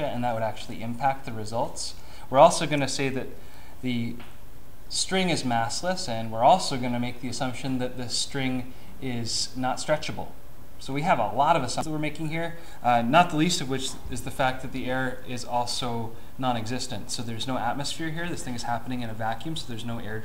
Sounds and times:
Speech: 0:00.0 - 0:04.2, 0:04.9 - 0:20.2.

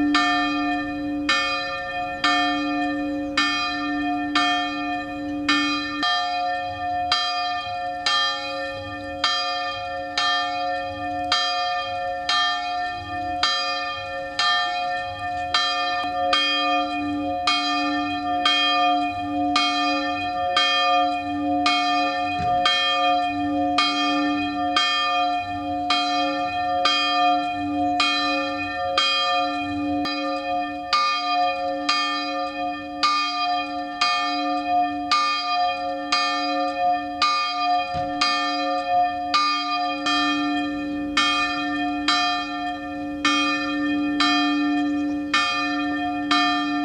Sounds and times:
Bell: 0:00.0 - 0:46.8.

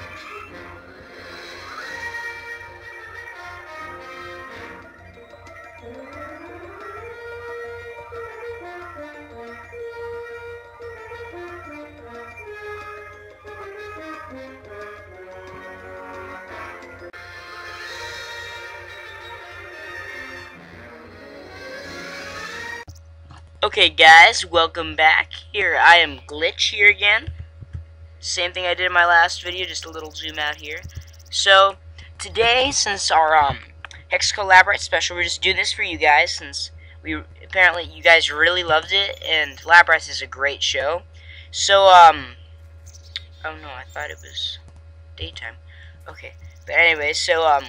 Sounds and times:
Music: 0:00.0 - 0:22.9
Speech: 0:23.6 - 0:27.3, 0:28.2 - 0:42.4, 0:43.4 - 0:44.6, 0:45.2 - 0:47.6.

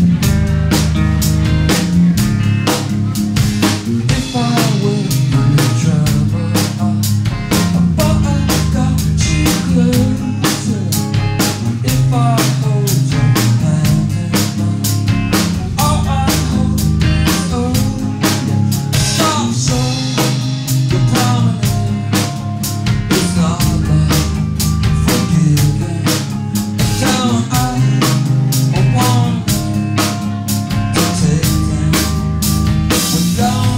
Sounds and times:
Music: 0:00.0 - 0:33.7.

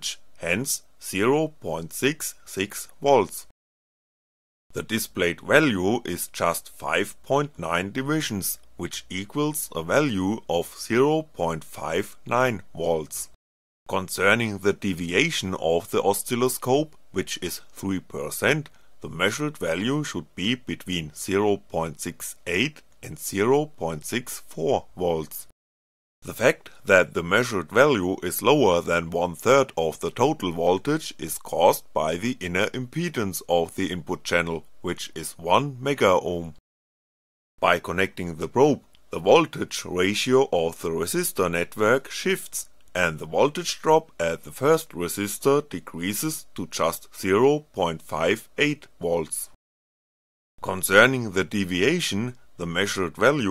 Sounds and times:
Speech synthesizer: 0:13.9 - 0:25.5, 0:26.3 - 0:36.6, 0:37.6 - 0:49.5, 0:50.6 - 0:53.5.

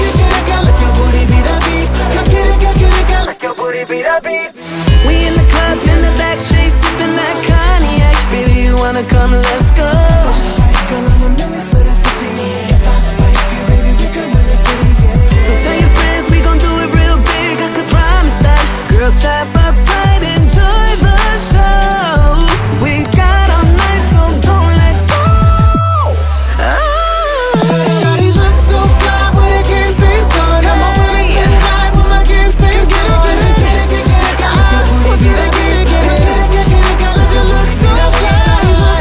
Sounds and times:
Music: 0:00.0 - 0:39.0.

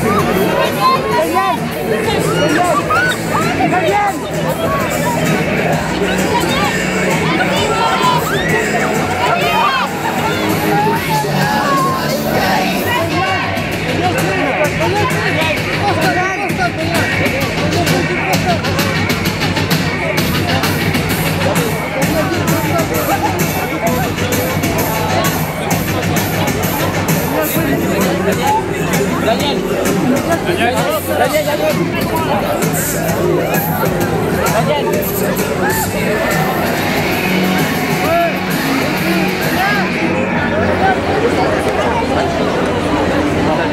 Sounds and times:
Music: 0:00.0 - 0:43.7
Speech: 0:00.0 - 0:43.7.

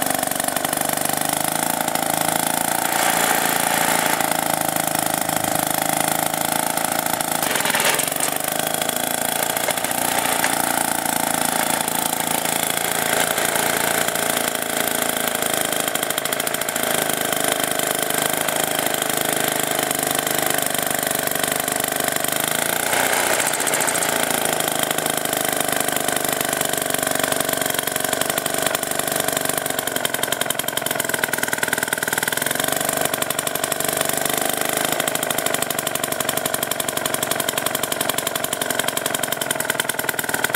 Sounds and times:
Lawn mower: 0:00.0 - 0:40.5.

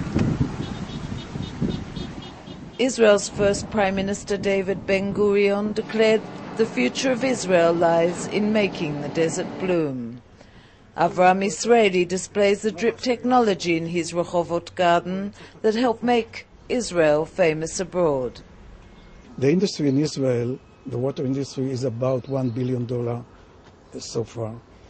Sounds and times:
Outside, rural or natural: 0:00.0 - 0:24.9.

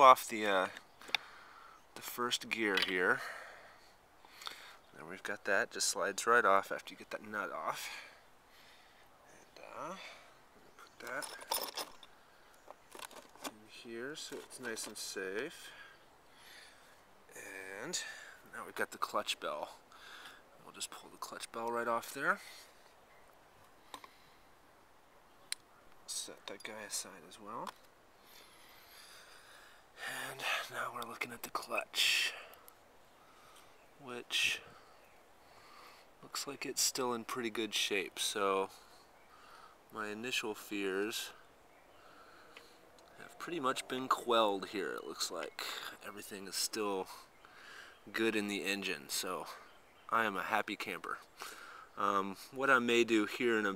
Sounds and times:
Speech: 0:00.0 - 0:00.8, 0:02.0 - 0:03.2, 0:04.9 - 0:08.1, 0:09.3 - 0:10.2, 0:11.0 - 0:11.4, 0:13.5 - 0:15.7, 0:17.3 - 0:19.8, 0:20.6 - 0:22.5, 0:26.1 - 0:27.7, 0:30.0 - 0:32.5, 0:34.0 - 0:34.7, 0:36.2 - 0:38.7, 0:39.9 - 0:41.4, 0:43.2 - 0:47.2, 0:48.1 - 0:51.3, 0:52.0 - 0:53.7.

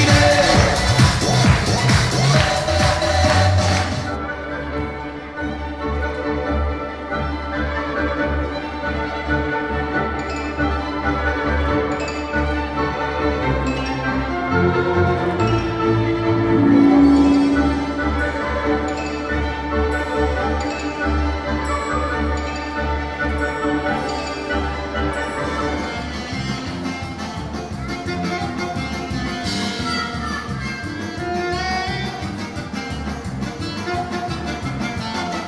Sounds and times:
Music: 0:00.0 - 0:35.4.

